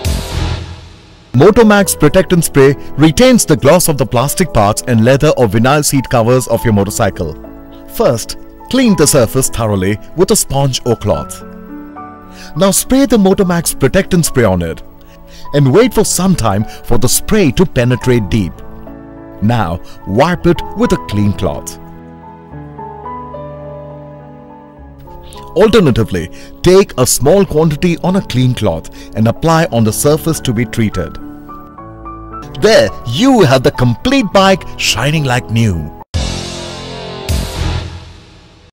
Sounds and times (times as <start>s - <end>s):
Music: 0.0s - 38.7s
Speech: 1.4s - 11.4s, 12.6s - 14.8s, 15.5s - 18.6s, 19.4s - 21.8s, 25.5s - 31.2s, 32.5s - 36.0s.